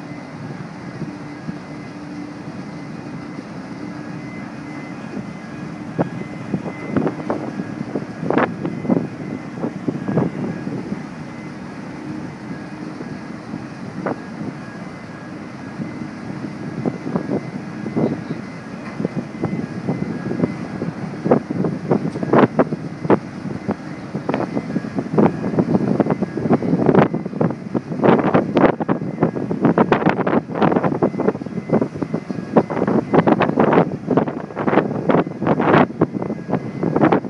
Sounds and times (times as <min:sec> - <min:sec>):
Ship: 0:00.0 - 0:37.2
Wind noise (microphone): 0:04.3 - 0:14.8, 0:15.6 - 0:37.2.